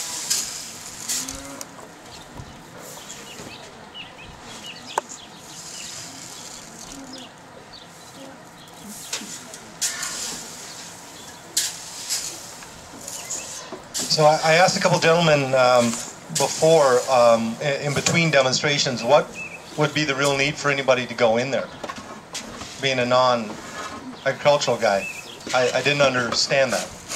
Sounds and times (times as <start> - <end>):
Speech: 14.0 - 21.7, 22.8 - 23.6, 24.2 - 27.0.